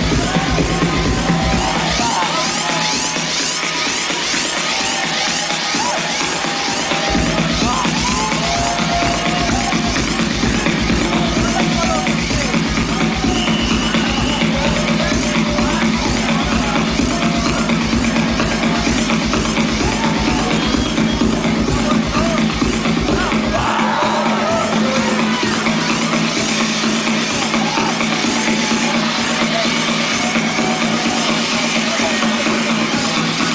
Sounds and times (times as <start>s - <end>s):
Electronic dance music: 0.0s - 33.5s
Electronica: 0.0s - 33.5s
Techno: 0.0s - 33.5s
Trance music: 0.0s - 33.5s
Speech: 11.1s - 13.0s, 21.8s - 22.5s.